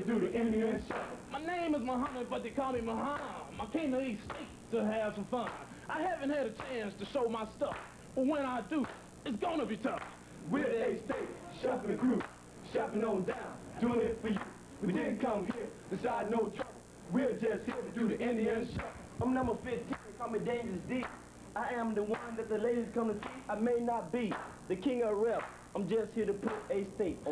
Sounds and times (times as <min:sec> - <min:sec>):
Speech: 0:00.0 - 0:16.7.